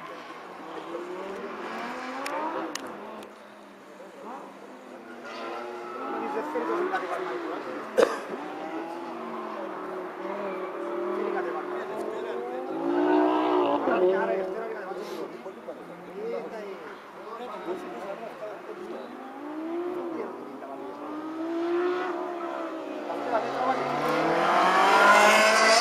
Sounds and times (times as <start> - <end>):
Race car, auto racing: 0.0 - 25.8
Speech: 10.8 - 12.8, 13.6 - 19.2, 22.2 - 24.1.